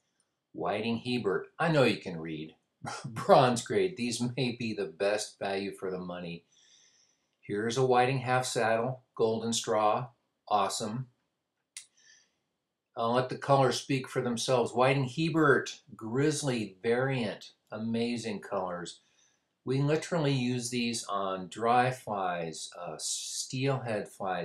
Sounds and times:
Speech: 0:00.6 - 0:06.4, 0:07.5 - 0:11.0, 0:13.0 - 0:18.9, 0:19.7 - 0:24.4.

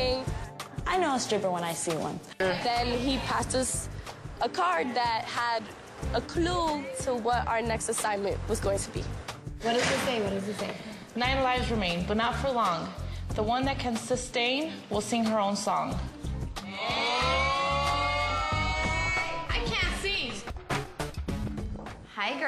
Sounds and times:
Music: 0:00.0 - 0:22.4.

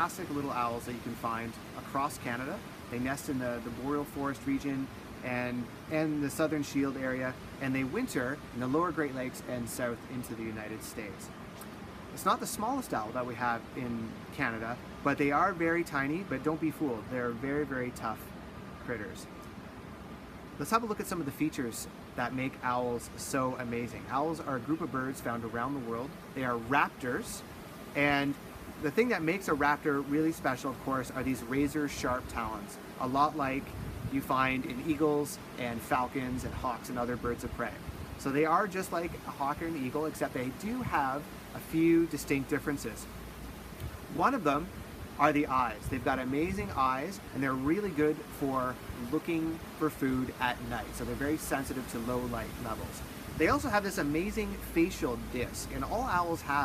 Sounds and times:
Speech: 0:00.0 - 0:11.3, 0:12.2 - 0:19.3, 0:20.6 - 0:43.1, 0:44.1 - 0:56.6.

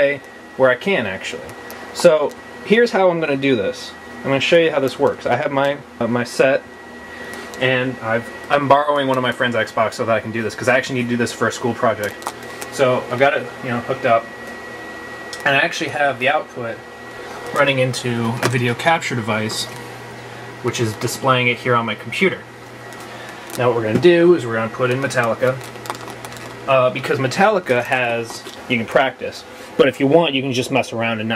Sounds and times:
Speech: 0:00.0 - 0:06.7, 0:07.6 - 0:14.3, 0:15.4 - 0:16.8, 0:17.5 - 0:19.8, 0:20.6 - 0:22.5, 0:23.6 - 0:25.6, 0:26.7 - 0:31.3.

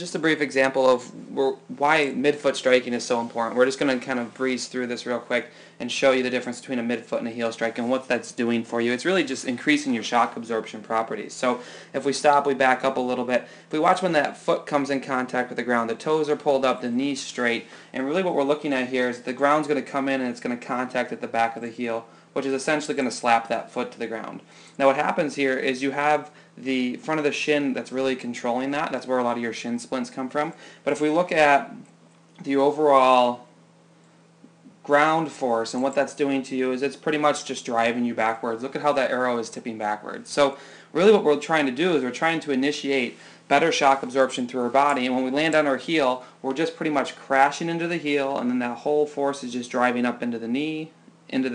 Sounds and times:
Speech: 0:00.0 - 0:33.5, 0:34.5 - 0:51.5.

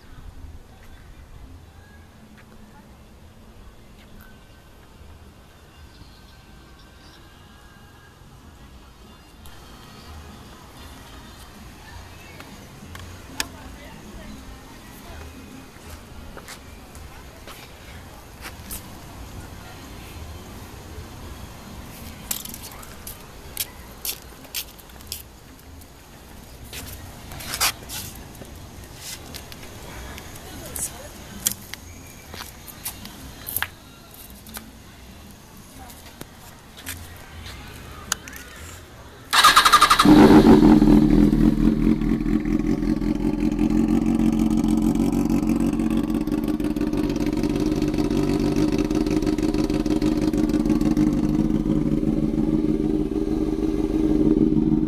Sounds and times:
Music: 0:00.3 - 0:40.0.

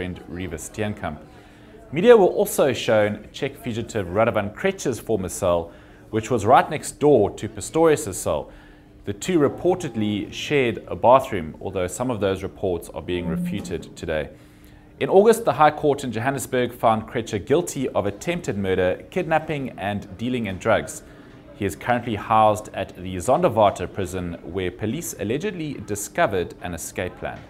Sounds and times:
Speech: 0:00.0 - 0:08.5, 0:09.1 - 0:14.4, 0:15.0 - 0:27.5.

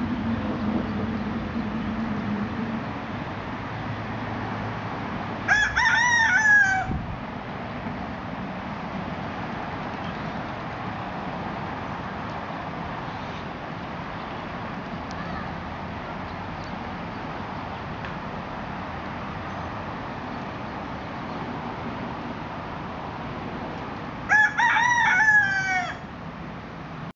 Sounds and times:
Crowing, cock-a-doodle-doo: 0:05.5 - 0:07.0, 0:24.3 - 0:26.1.

